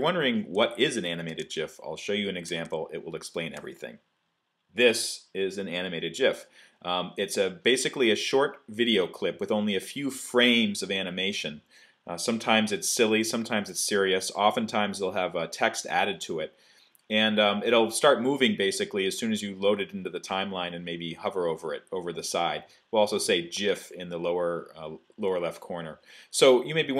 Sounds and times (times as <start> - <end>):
Speech: 0.0 - 4.0, 4.8 - 16.5, 17.1 - 26.9.